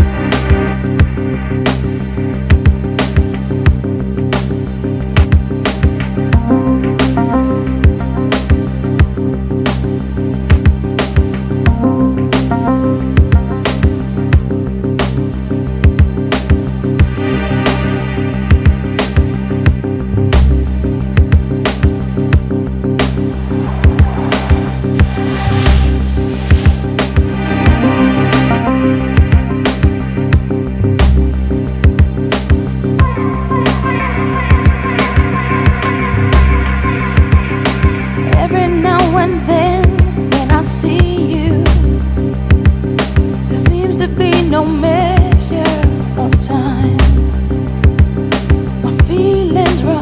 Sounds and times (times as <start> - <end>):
Music: 0.0 - 50.0.